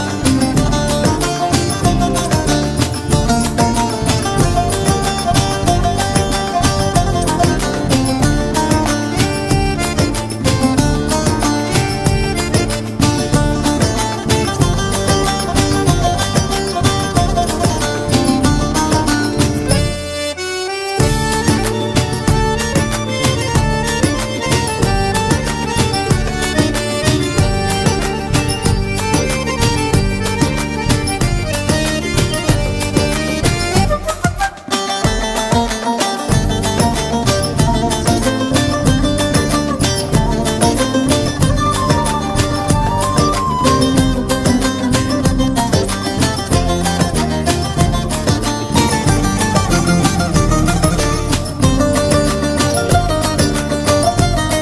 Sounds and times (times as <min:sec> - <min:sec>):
Folk music: 0:00.0 - 0:54.6.